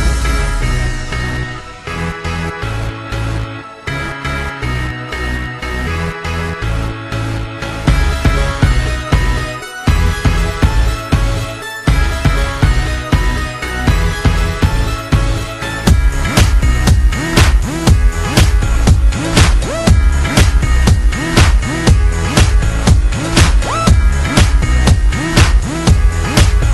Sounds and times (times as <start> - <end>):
Music: 0.0 - 26.7.